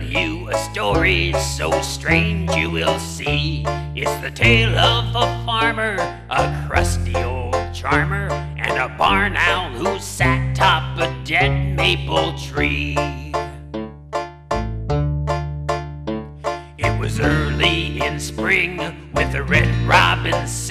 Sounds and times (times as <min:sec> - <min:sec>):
Music: 0:00.0 - 0:20.7.